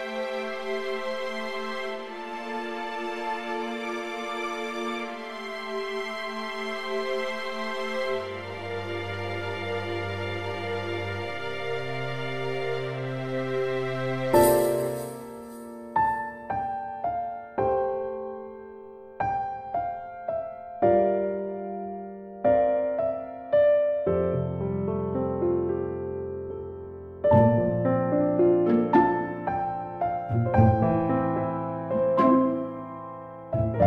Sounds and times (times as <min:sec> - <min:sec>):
Music: 0:00.0 - 0:33.8.